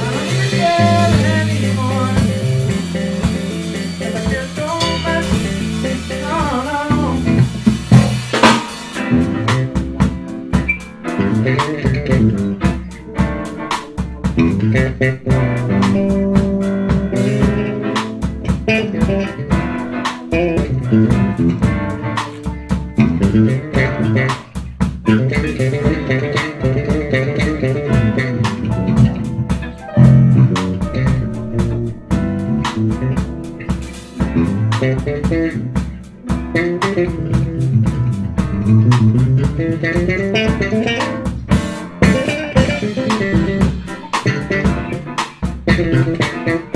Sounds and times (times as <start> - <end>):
Blues: 0.0 - 46.7
Guitar: 0.0 - 46.7.